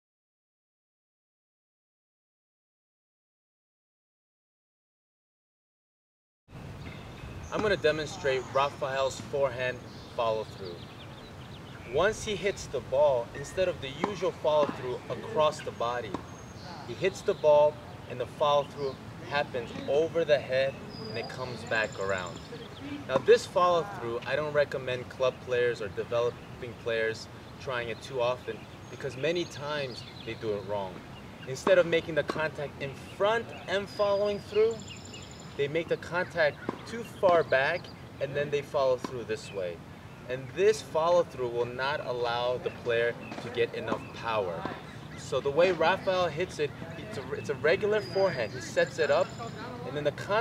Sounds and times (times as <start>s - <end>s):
Speech: 7.6s - 10.8s, 11.9s - 34.8s, 35.6s - 50.4s.